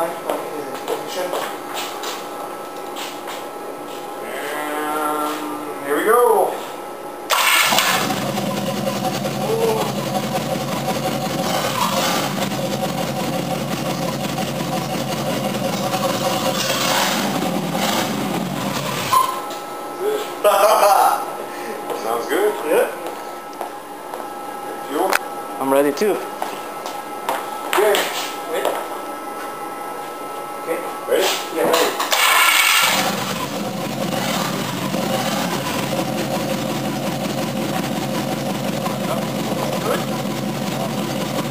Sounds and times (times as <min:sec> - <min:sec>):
Speech: 0:00.0 - 0:01.6, 0:04.2 - 0:06.7, 0:09.4 - 0:10.0, 0:20.0 - 0:23.0, 0:24.8 - 0:26.3, 0:27.7 - 0:28.9, 0:30.6 - 0:32.0, 0:39.0 - 0:40.1
Idling: 0:07.3 - 0:19.3, 0:32.2 - 0:41.5
Heavy engine (low frequency): 0:07.3 - 0:19.4, 0:32.1 - 0:41.5.